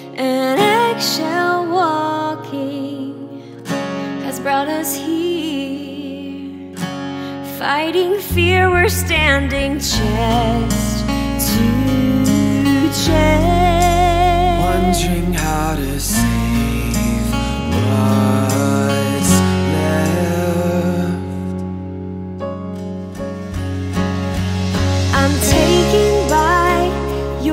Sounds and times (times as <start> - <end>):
Sad music: 0.0 - 27.5
Soundtrack music: 9.6 - 27.5.